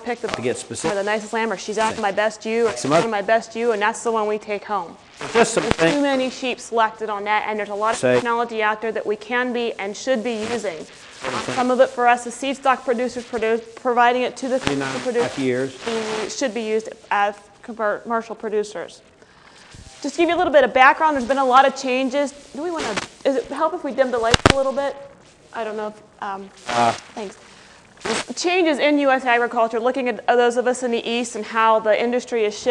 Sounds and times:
Speech: 0.0 - 19.0, 25.6 - 27.3.

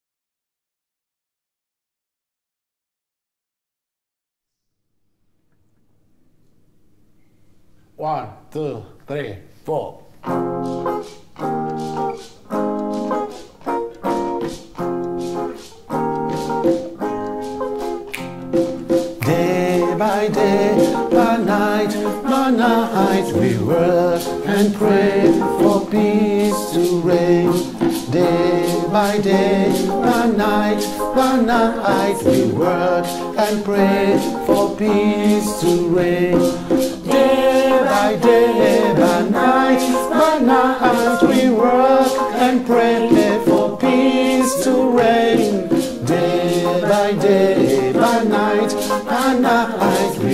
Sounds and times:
Singing: 19.2 - 50.3.

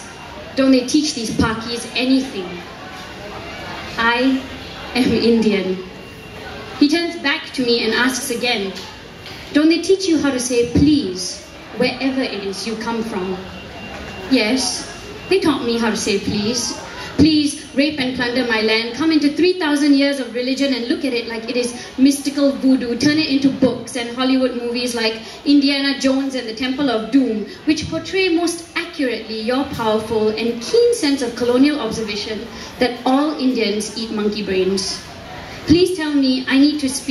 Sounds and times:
Speech: 0.0 - 5.9, 6.5 - 13.5, 14.3 - 37.1.

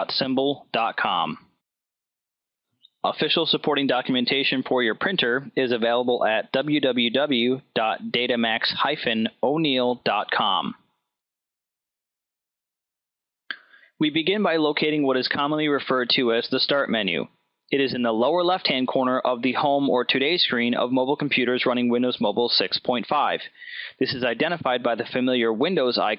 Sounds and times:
Speech: 0.0 - 1.6, 3.0 - 10.8, 13.5 - 26.1.

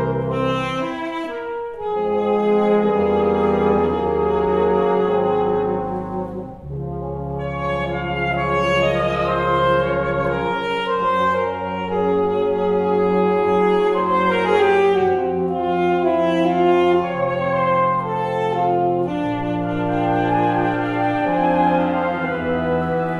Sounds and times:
Brass instrument: 0.0 - 23.1
Jazz: 0.0 - 23.1
Orchestra: 0.0 - 23.1
Saxophone: 0.0 - 23.1.

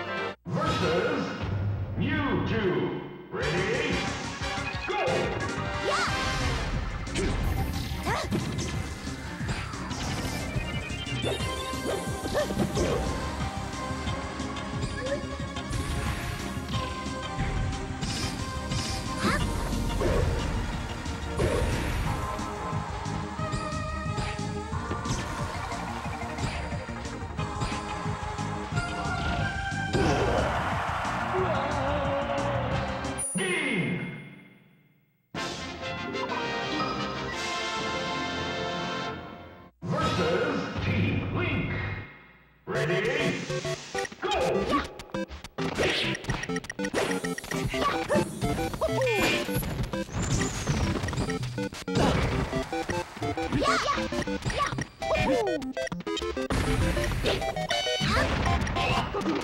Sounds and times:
Music: 0.0 - 0.4, 3.3 - 33.7, 35.3 - 39.8, 42.8 - 59.4.

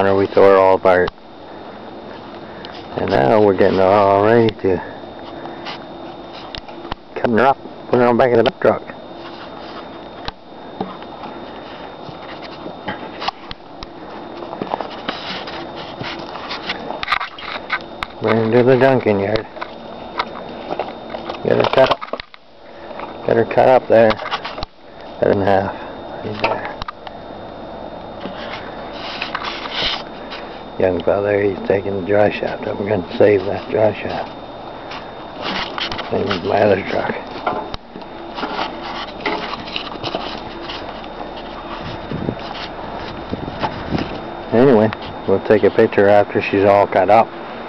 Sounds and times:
Speech: 0.0 - 1.1, 3.0 - 4.9, 7.2 - 9.0, 18.2 - 19.5, 21.4 - 22.0, 23.2 - 24.2, 25.2 - 26.8, 30.8 - 34.3, 36.1 - 37.3, 44.5 - 47.3
Outside, urban or manmade: 0.0 - 47.6.

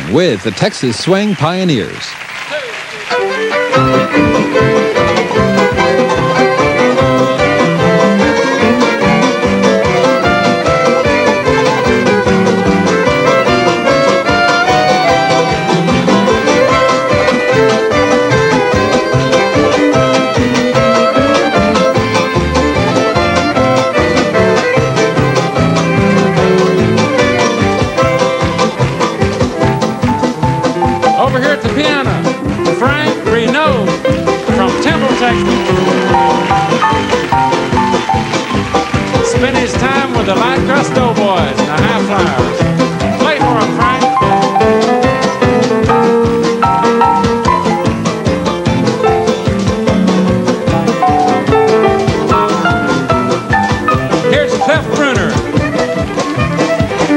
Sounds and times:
Speech: 0.0 - 3.2, 31.2 - 32.2, 32.8 - 33.9, 34.6 - 35.7, 39.3 - 42.5, 43.2 - 44.1, 54.3 - 55.4
Music: 0.0 - 57.1.

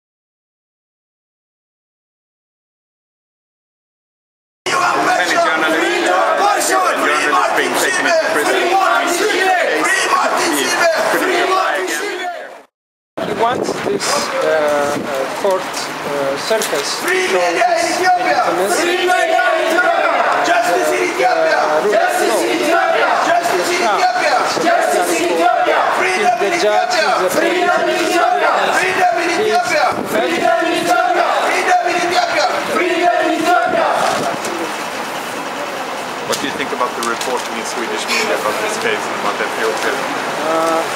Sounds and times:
Speech: 4.7 - 12.5, 13.2 - 32.7, 35.6 - 40.9.

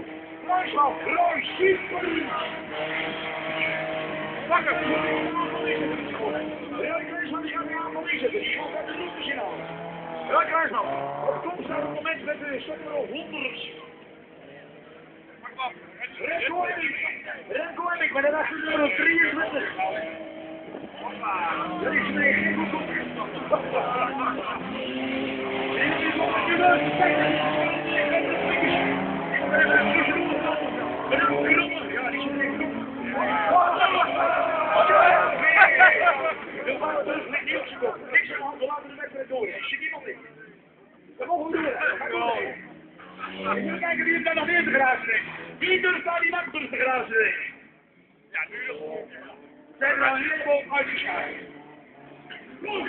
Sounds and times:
Speech: 0.5 - 2.6, 4.4 - 9.6, 10.3 - 13.9, 15.4 - 20.2, 21.0 - 24.8, 25.7 - 40.6, 41.2 - 47.6, 48.3 - 51.5, 52.3 - 52.8.

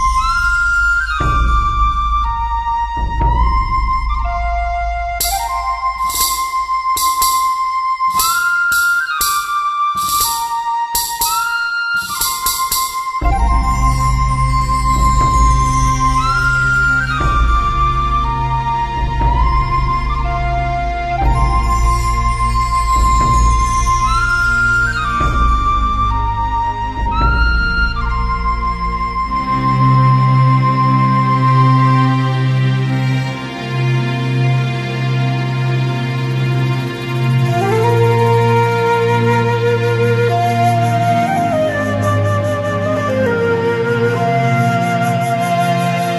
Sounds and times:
Music: 0.0 - 46.1.

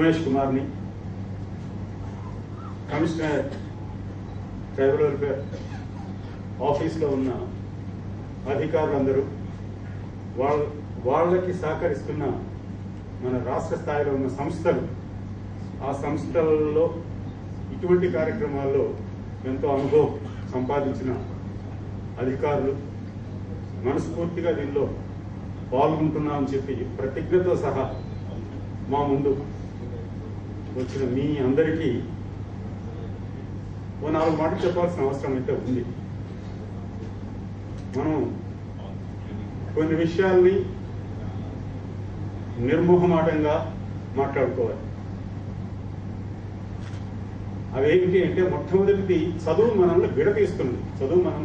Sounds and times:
Male speech, man speaking: 0.0 - 0.8, 2.9 - 3.7, 4.8 - 5.6, 6.6 - 7.6, 8.5 - 9.4, 10.4 - 12.5, 13.2 - 15.0, 15.8 - 17.1, 17.7 - 21.3, 22.2 - 22.9, 23.8 - 25.0, 25.7 - 29.5, 30.8 - 32.1, 34.0 - 36.0, 38.0 - 40.8, 42.6 - 44.9, 47.7 - 51.4.

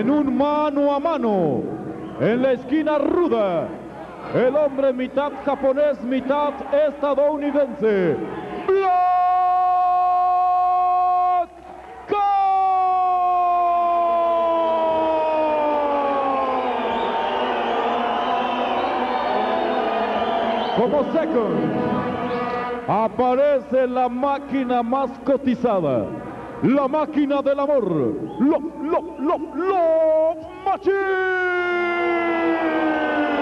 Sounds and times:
Speech: 0.0 - 11.5, 20.8 - 21.8, 22.9 - 31.8.

